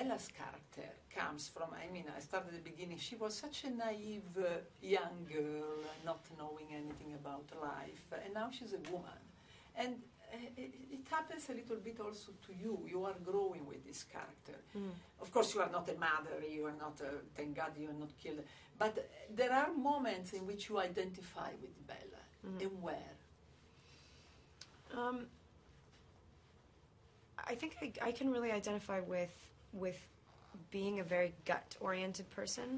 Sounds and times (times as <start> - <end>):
Speech: 0.0 - 23.3, 24.9 - 25.4, 27.4 - 32.7.